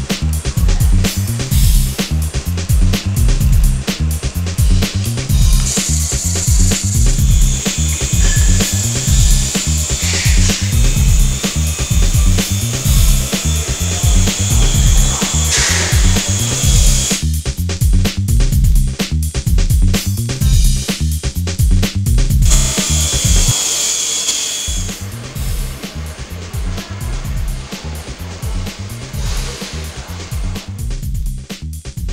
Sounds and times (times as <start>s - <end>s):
Music: 0.0s - 32.1s.